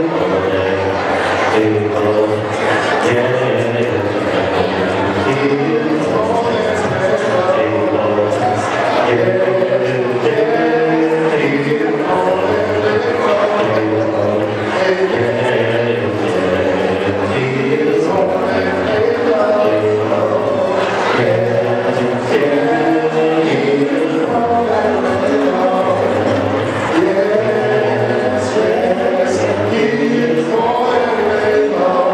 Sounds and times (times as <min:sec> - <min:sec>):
Male singing: 0:00.0 - 0:32.1.